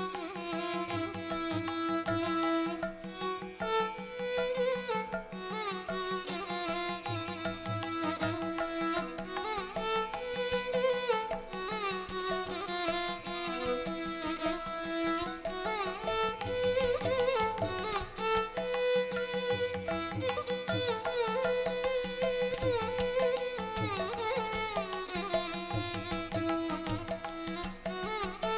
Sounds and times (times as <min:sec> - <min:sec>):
Violin, fiddle: 0:00.0 - 0:28.5.